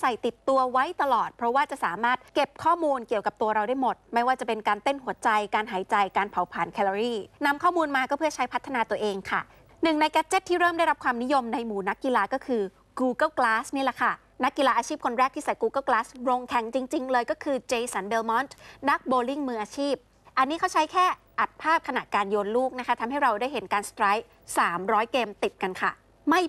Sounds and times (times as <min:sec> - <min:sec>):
Speech: 0:00.0 - 0:26.4.